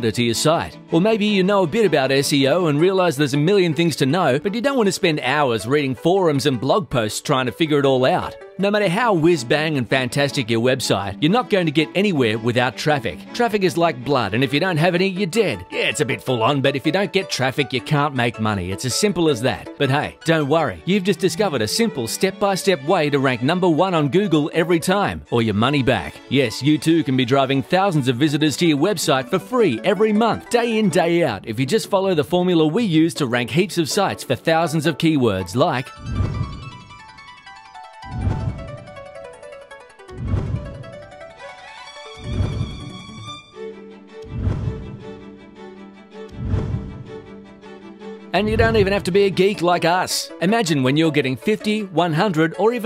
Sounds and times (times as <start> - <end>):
Speech: 0.0 - 35.9, 48.4 - 52.8
Music: 0.0 - 52.8.